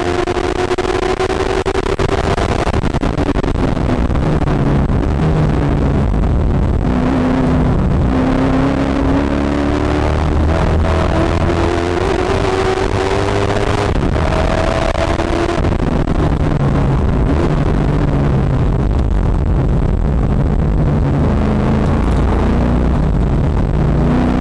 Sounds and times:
Car: 0:00.0 - 0:24.4.

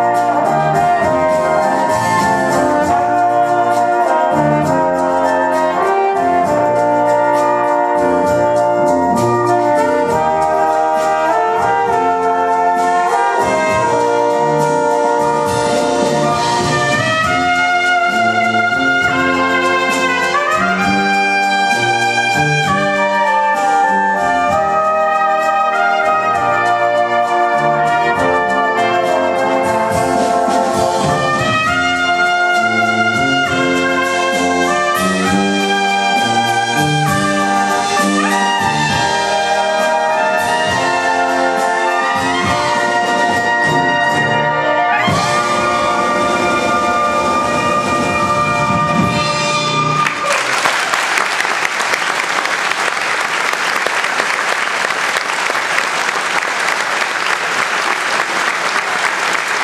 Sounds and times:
Clarinet: 0:00.0 - 0:50.6
Trumpet: 0:00.0 - 0:59.6.

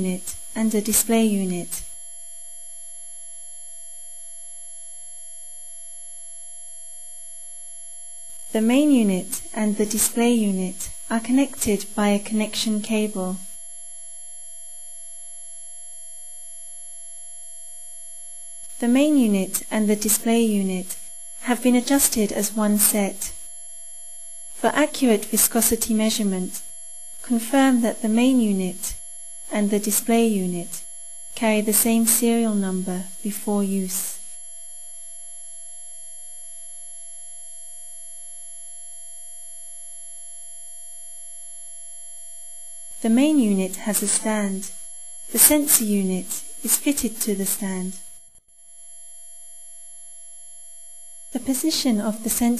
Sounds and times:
Narration, monologue: 0:00.0 - 0:02.0, 0:08.4 - 0:13.6, 0:18.6 - 0:23.6, 0:24.5 - 0:34.3, 0:43.0 - 0:48.2, 0:51.4 - 0:52.6.

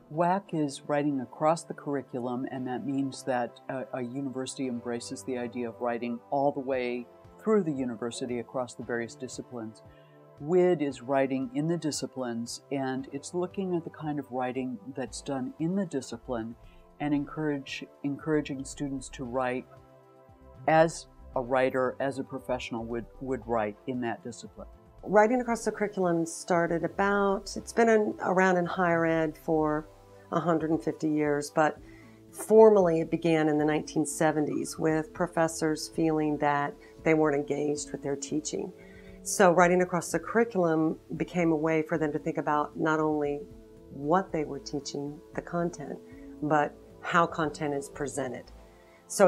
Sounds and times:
Music: 0:00.0 - 0:49.2
Speech: 0:00.1 - 0:09.8, 0:10.4 - 0:19.6, 0:20.6 - 0:31.8, 0:32.4 - 0:38.7, 0:39.3 - 0:48.5.

